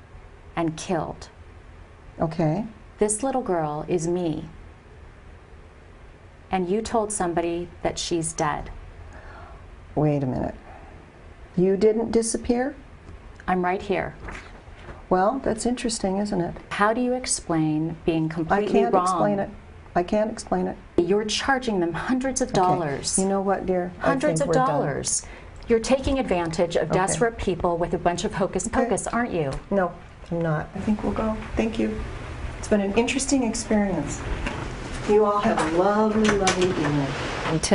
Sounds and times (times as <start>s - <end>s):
Inside, small room: 0.0s - 37.7s
Speech: 15.2s - 32.0s.